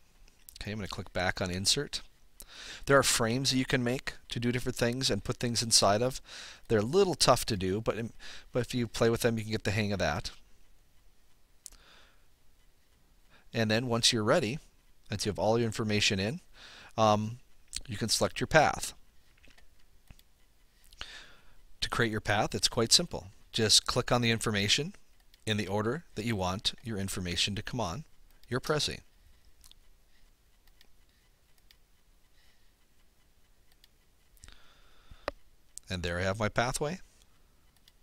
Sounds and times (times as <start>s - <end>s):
Speech: 0.5s - 2.1s, 2.8s - 10.4s, 13.5s - 16.4s, 17.0s - 19.0s, 21.8s - 29.0s, 35.8s - 37.1s.